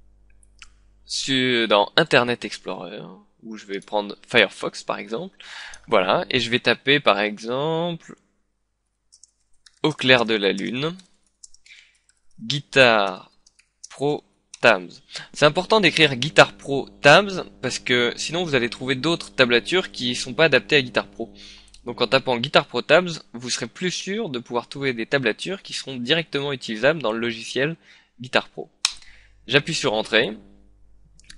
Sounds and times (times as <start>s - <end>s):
Speech: 1.1s - 8.2s, 9.8s - 11.0s, 12.4s - 13.3s, 13.9s - 28.8s, 29.5s - 30.4s.